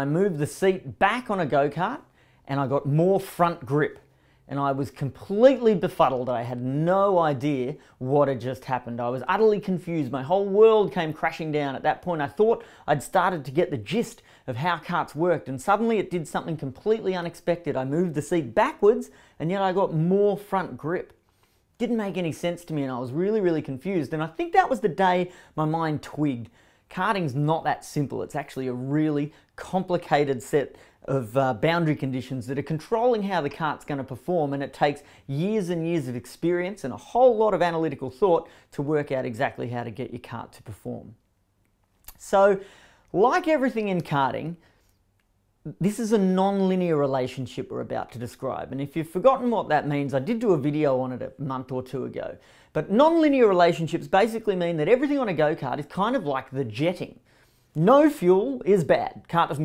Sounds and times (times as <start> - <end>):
Speech: 0.0 - 21.2, 21.8 - 41.2, 42.1 - 44.6, 45.6 - 57.2, 57.8 - 59.6.